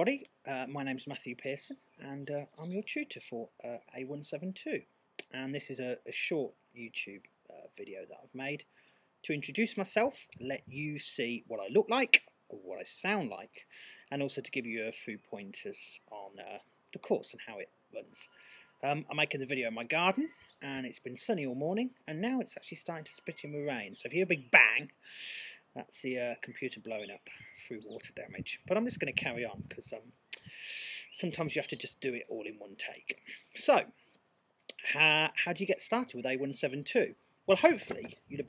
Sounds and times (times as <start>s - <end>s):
Speech: 0.0s - 8.6s, 9.3s - 25.0s, 25.8s - 33.9s, 34.7s - 38.4s.